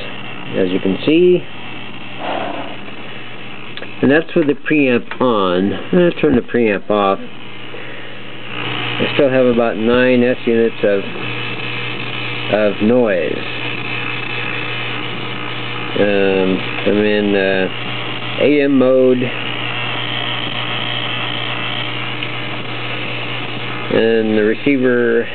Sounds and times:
Speech: 0:00.0 - 0:01.5, 0:03.9 - 0:07.3, 0:09.0 - 0:11.2, 0:12.5 - 0:13.5, 0:16.0 - 0:17.8, 0:18.4 - 0:19.4, 0:23.9 - 0:25.3
Radio: 0:00.0 - 0:25.3.

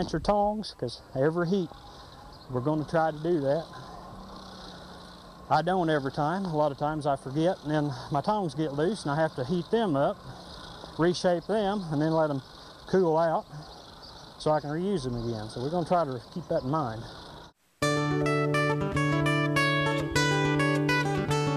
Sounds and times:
Speech: 0:00.0 - 0:01.7, 0:02.5 - 0:03.8, 0:05.5 - 0:10.2, 0:11.0 - 0:13.7, 0:14.4 - 0:17.1
Outside, rural or natural: 0:00.0 - 0:21.5.

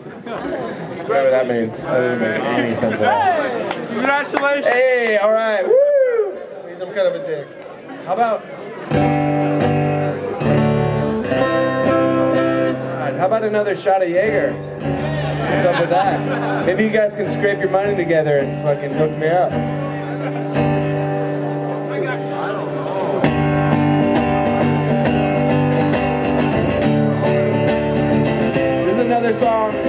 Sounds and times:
Music: 0:08.9 - 0:29.8.

